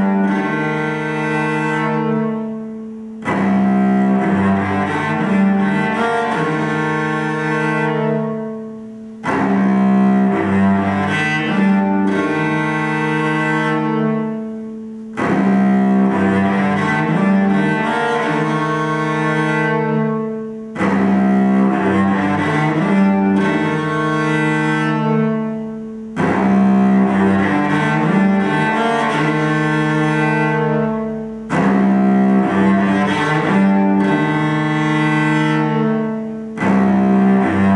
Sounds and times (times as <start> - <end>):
Cello: 0.0 - 37.7.